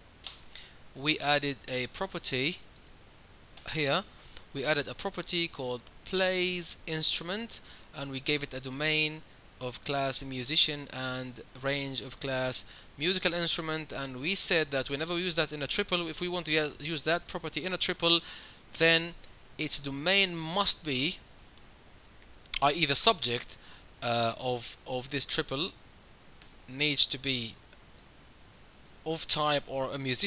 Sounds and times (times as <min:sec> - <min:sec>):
Speech: 0:01.0 - 0:02.6, 0:03.6 - 0:18.2, 0:18.8 - 0:21.2, 0:22.6 - 0:25.8, 0:26.7 - 0:27.6, 0:29.1 - 0:30.2.